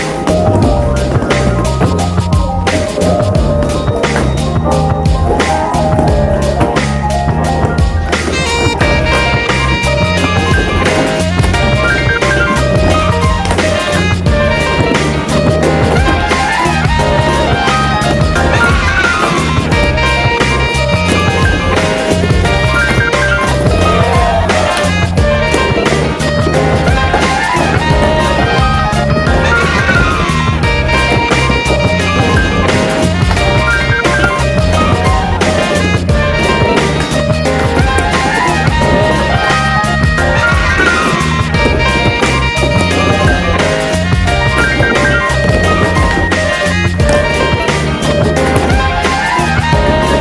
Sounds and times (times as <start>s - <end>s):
Music: 0.0s - 50.2s
Skateboard: 0.0s - 50.2s.